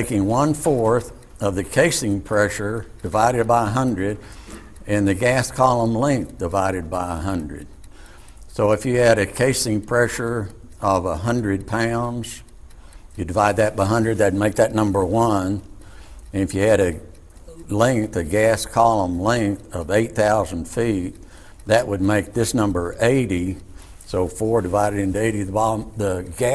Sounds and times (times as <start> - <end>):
Speech: 0.0 - 4.2, 4.8 - 7.7, 8.5 - 12.5, 13.2 - 15.7, 16.3 - 26.5.